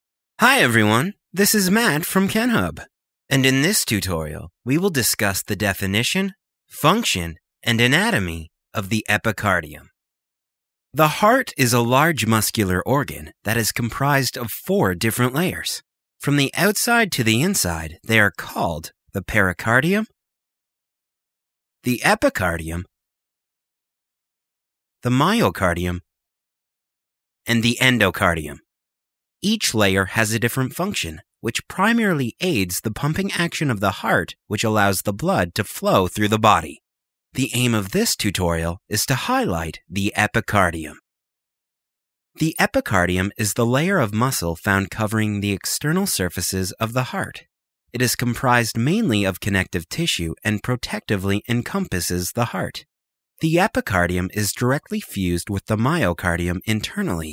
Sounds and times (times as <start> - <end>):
Speech: 0.4 - 9.9, 11.0 - 20.2, 21.8 - 22.9, 25.0 - 26.1, 27.5 - 28.7, 29.4 - 36.8, 37.4 - 41.0, 42.4 - 57.3.